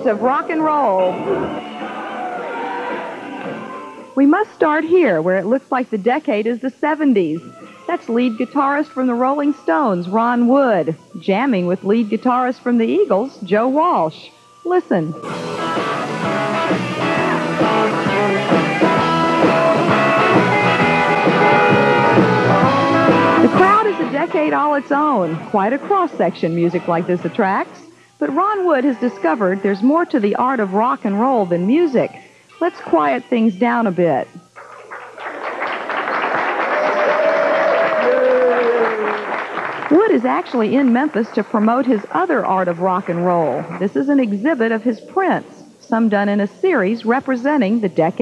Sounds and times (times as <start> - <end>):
Speech: 0.0 - 1.4, 4.2 - 15.2, 23.4 - 34.4, 39.9 - 48.2
Music: 0.0 - 48.2.